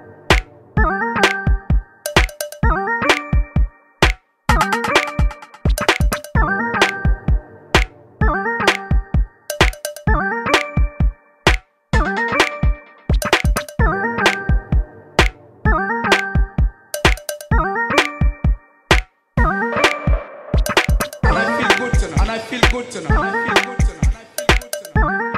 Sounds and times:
Music: 0:00.0 - 0:25.3.

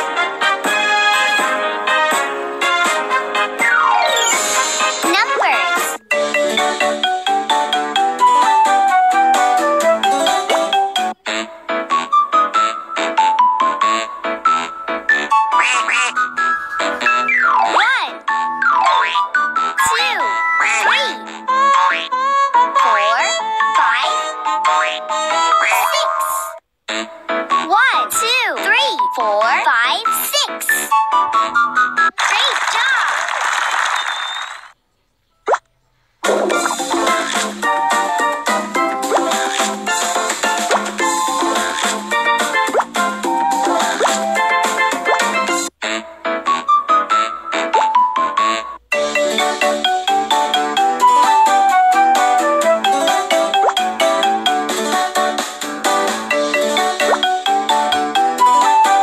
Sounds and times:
Music for children: 0:00.0 - 0:32.2, 0:35.9 - 0:59.0
Speech: 0:05.1 - 0:05.8, 0:17.7 - 0:18.2, 0:19.8 - 0:21.2, 0:25.8 - 0:26.5, 0:27.7 - 0:30.9, 0:32.2 - 0:33.2.

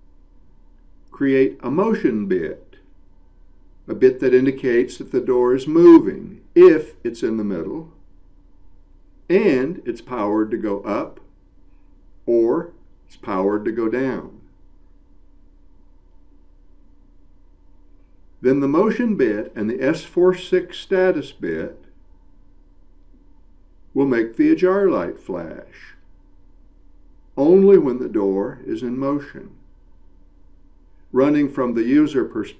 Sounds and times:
Speech: 0:01.2 - 0:02.8, 0:03.9 - 0:07.9, 0:09.3 - 0:11.2, 0:12.3 - 0:14.5, 0:18.4 - 0:21.9, 0:24.0 - 0:26.0, 0:27.4 - 0:29.6, 0:31.2 - 0:32.5.

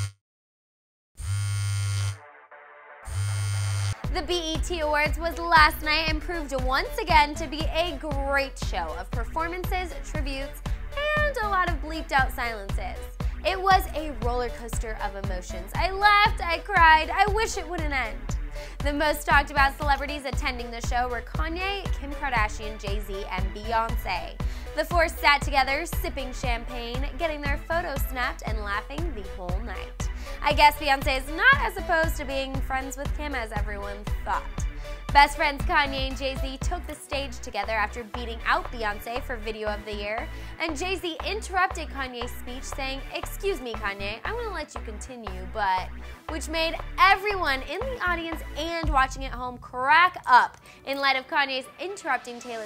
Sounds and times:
Music: 0:01.3 - 0:52.6
Speech: 0:04.1 - 0:52.6.

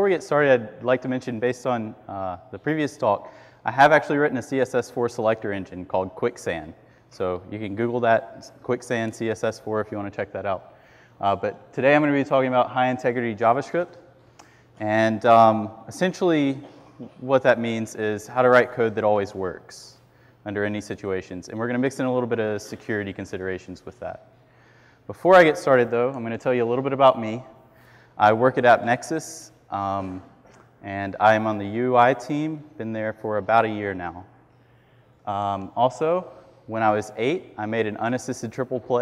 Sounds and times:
Speech: 0:00.0 - 0:14.0, 0:14.8 - 0:24.3, 0:25.1 - 0:27.6, 0:28.2 - 0:34.3, 0:35.3 - 0:39.0.

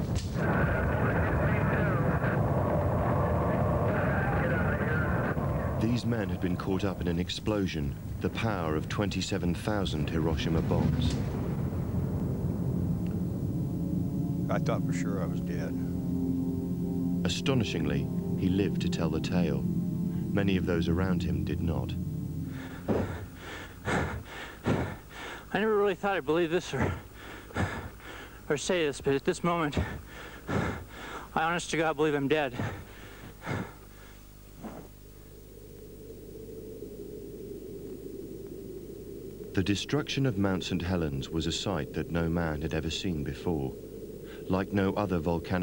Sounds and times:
Speech: 0:00.4 - 0:02.4, 0:03.0 - 0:11.2, 0:14.5 - 0:15.8, 0:17.2 - 0:19.7, 0:20.3 - 0:22.0, 0:25.5 - 0:27.1, 0:28.5 - 0:30.0, 0:31.4 - 0:32.8, 0:39.6 - 0:43.8, 0:44.5 - 0:45.6.

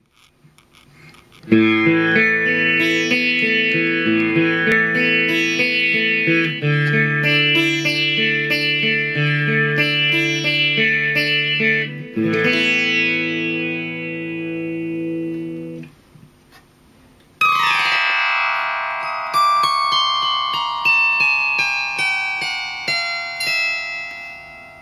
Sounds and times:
Electric guitar: 0:01.4 - 0:15.9.

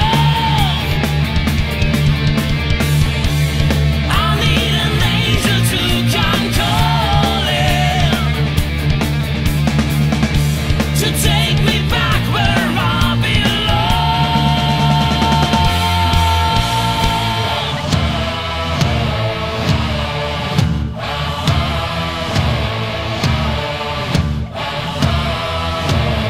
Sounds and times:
Singing: 0:00.0 - 0:01.3, 0:04.1 - 0:08.5, 0:11.0 - 0:26.3
Heavy metal: 0:00.0 - 0:26.3
Punk rock: 0:00.0 - 0:26.3.

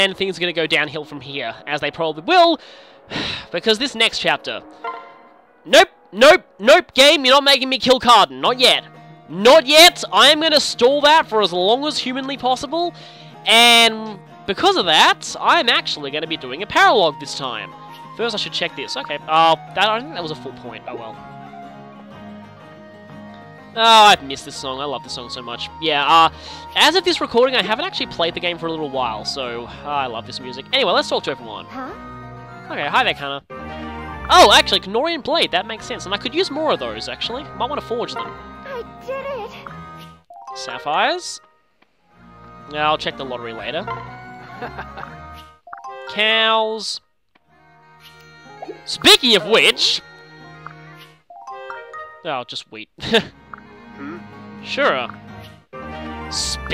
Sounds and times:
Music: 0:00.0 - 0:56.7
Speech: 0:05.7 - 0:12.9, 0:23.8 - 0:31.9, 0:42.7 - 0:43.9, 0:48.9 - 0:50.0, 0:52.3 - 0:53.2.

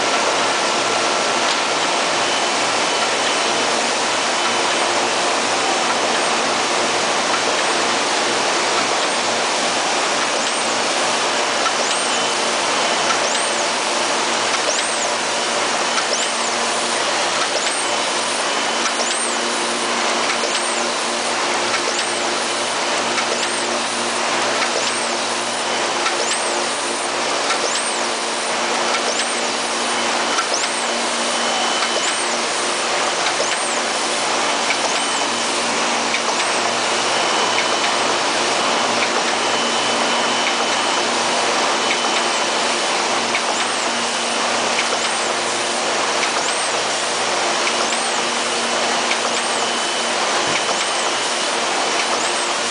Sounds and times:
Printer: 0:00.0 - 0:52.7.

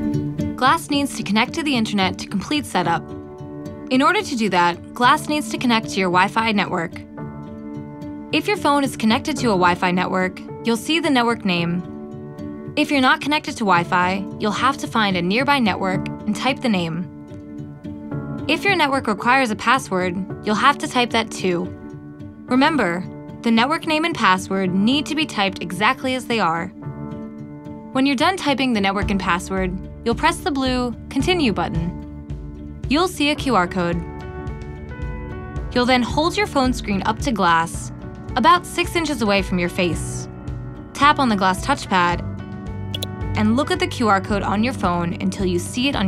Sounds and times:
Music: 0:00.0 - 0:46.0
Speech: 0:00.6 - 0:03.0, 0:03.9 - 0:07.0, 0:08.4 - 0:11.8, 0:12.8 - 0:17.1, 0:18.5 - 0:21.7, 0:22.5 - 0:26.7, 0:28.0 - 0:32.0, 0:32.9 - 0:34.1, 0:35.8 - 0:40.3, 0:41.0 - 0:42.2, 0:43.0 - 0:46.0.

